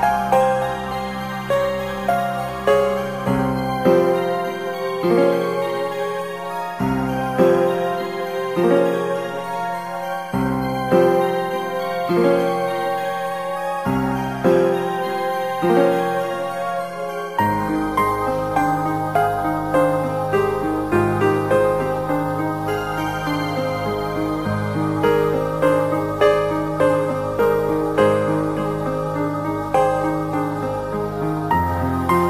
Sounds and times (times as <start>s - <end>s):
Music: 0.0s - 32.2s.